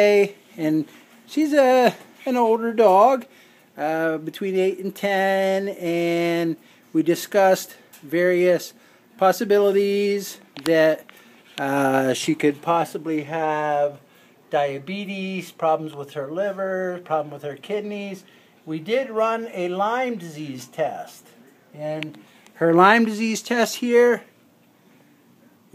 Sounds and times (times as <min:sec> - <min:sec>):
Speech: 0:00.0 - 0:24.4.